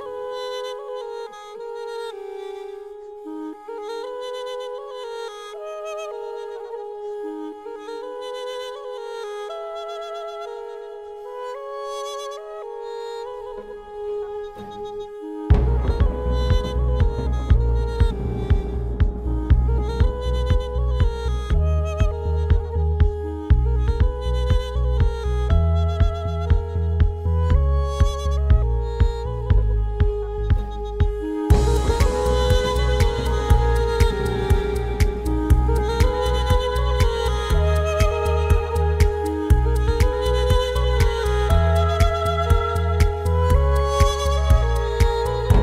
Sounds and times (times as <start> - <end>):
Music: 0.0 - 45.6.